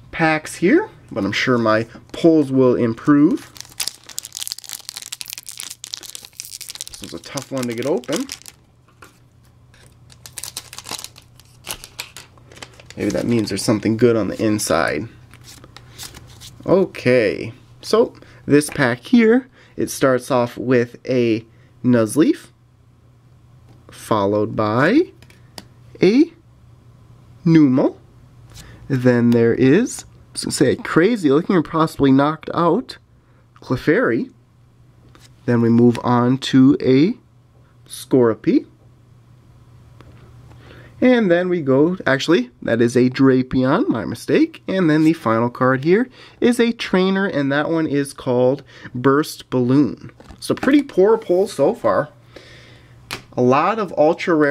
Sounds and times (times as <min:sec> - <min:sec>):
Speech: 0:00.1 - 0:03.5, 0:07.0 - 0:08.3, 0:13.0 - 0:15.2, 0:16.6 - 0:22.6, 0:23.9 - 0:25.2, 0:26.0 - 0:26.4, 0:27.4 - 0:28.0, 0:28.9 - 0:33.0, 0:33.6 - 0:34.4, 0:35.5 - 0:37.2, 0:37.9 - 0:38.8, 0:41.0 - 0:52.2, 0:53.4 - 0:54.5.